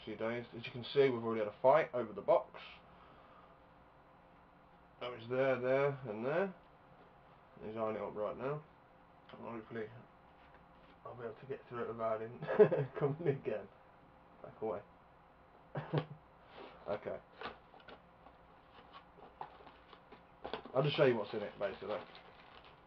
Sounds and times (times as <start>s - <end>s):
Speech: 0.0s - 2.8s, 5.0s - 6.6s, 7.6s - 8.7s, 9.3s - 10.1s, 11.0s - 13.7s, 14.4s - 14.9s, 16.8s - 17.3s, 20.7s - 22.2s.